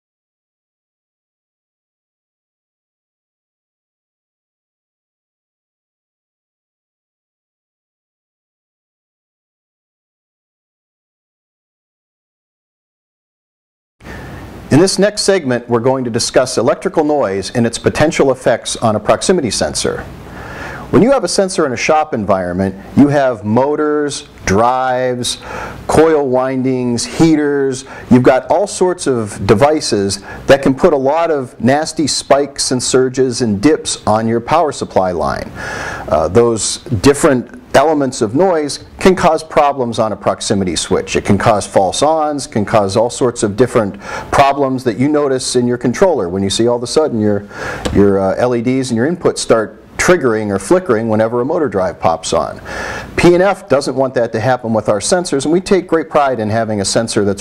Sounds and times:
Speech: 14.7 - 20.1, 20.9 - 35.5, 36.1 - 57.4.

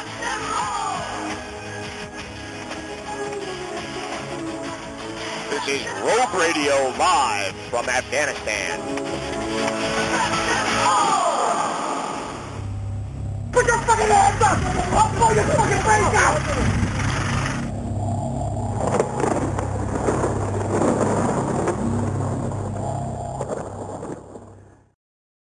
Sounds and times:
Music: 0.0 - 16.8
Speech: 5.5 - 8.8, 13.6 - 16.7.

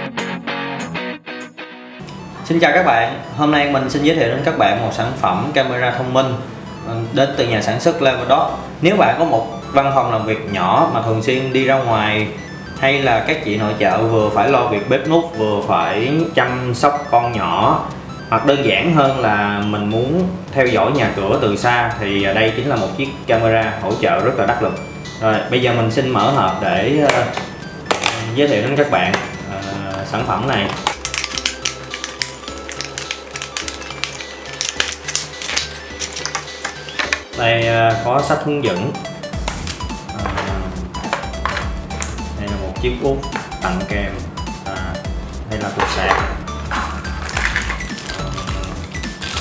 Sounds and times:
Music: 0.0 - 49.4
Speech: 2.5 - 27.4, 28.1 - 30.8, 37.4 - 39.0, 40.2 - 40.8, 42.4 - 46.4, 48.1 - 48.8.

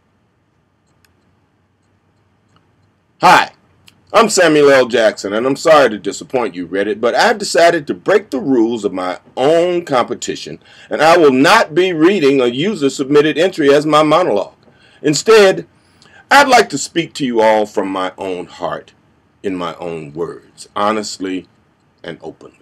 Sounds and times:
Narration, monologue: 0.0 - 22.6.

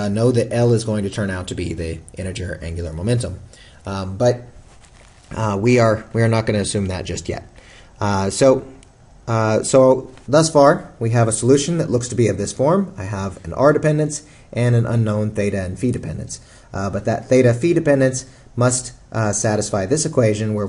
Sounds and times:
Speech: 0.0 - 4.6, 5.3 - 20.6.

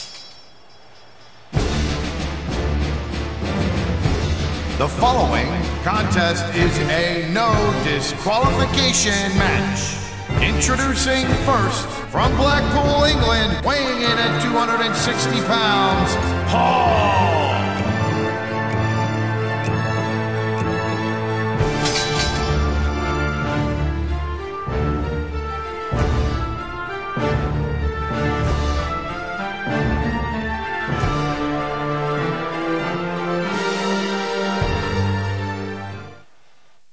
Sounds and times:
Music: 1.5 - 36.3.

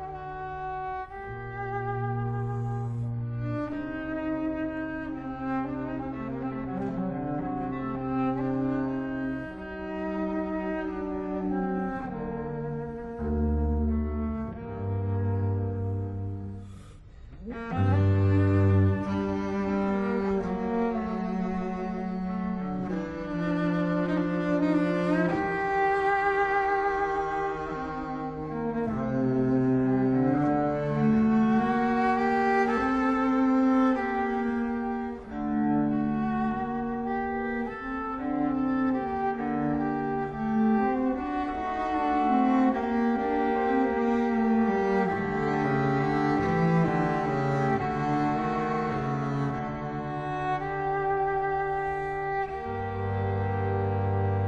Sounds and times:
Cello: 0.0 - 54.4
Double bass: 0.0 - 54.4.

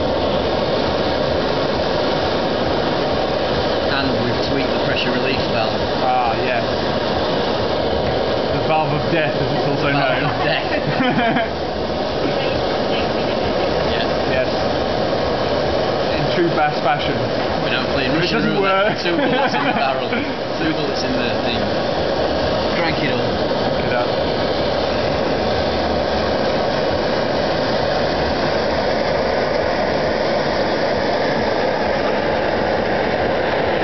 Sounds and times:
Speech: 3.9 - 6.7, 8.6 - 10.9, 16.1 - 21.7, 22.7 - 24.1.

